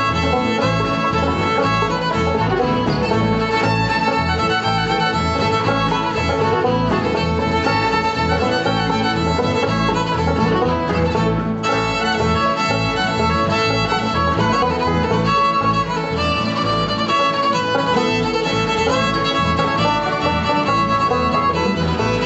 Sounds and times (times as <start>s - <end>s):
Violin, fiddle: 0.0s - 22.2s.